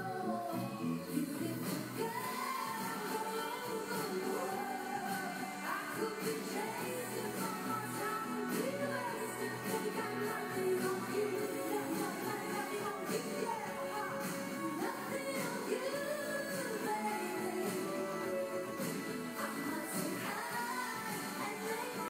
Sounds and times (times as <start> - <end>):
Music: 0.0 - 22.0.